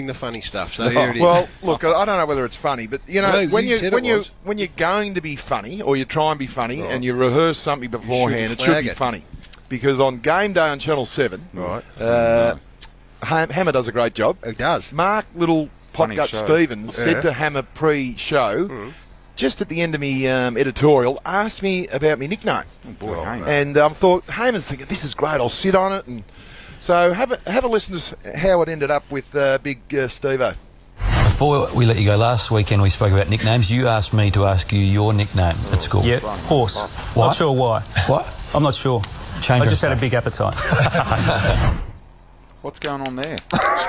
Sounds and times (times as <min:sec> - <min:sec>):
Speech: 0:00.0 - 0:12.6, 0:13.2 - 0:26.2, 0:26.8 - 0:30.6, 0:31.2 - 0:40.6, 0:42.6 - 0:43.5.